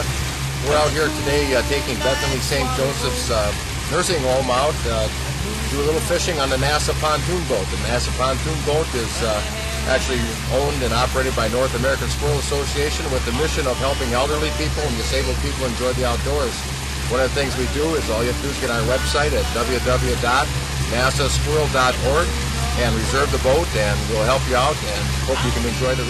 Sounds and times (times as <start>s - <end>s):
Boat, Water vehicle: 0.0s - 26.0s
Speech: 0.0s - 26.0s.